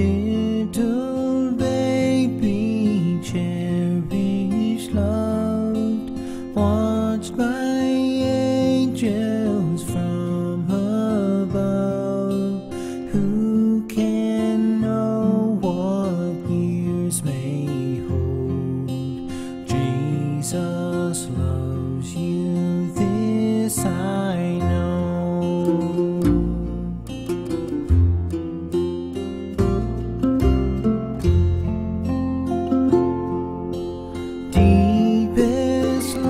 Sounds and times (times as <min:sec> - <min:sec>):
Lullaby: 0:00.0 - 0:27.9, 0:32.9 - 0:36.2.